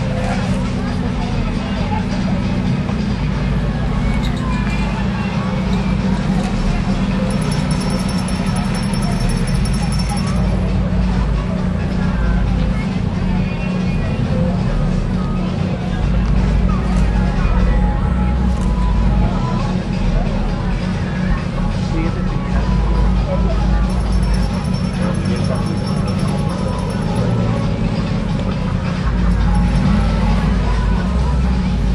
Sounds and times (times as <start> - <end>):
Music: 0.0 - 31.9
Speech: 0.0 - 31.9.